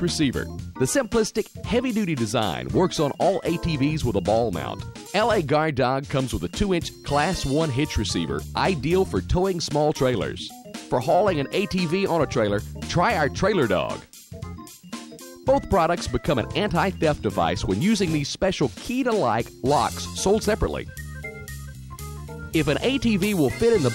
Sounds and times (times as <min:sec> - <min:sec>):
Speech: 0:00.0 - 0:14.0, 0:15.5 - 0:20.9, 0:22.6 - 0:23.9
Music: 0:00.0 - 0:23.9.